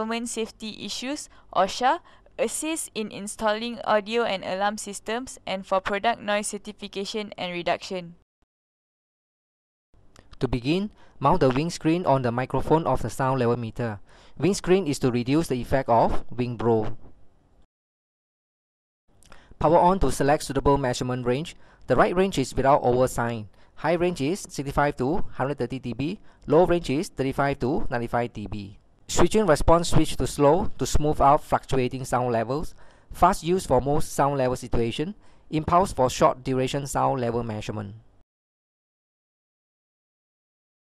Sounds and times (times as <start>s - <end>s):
Speech: 0.0s - 8.2s, 10.4s - 17.0s, 19.6s - 38.0s.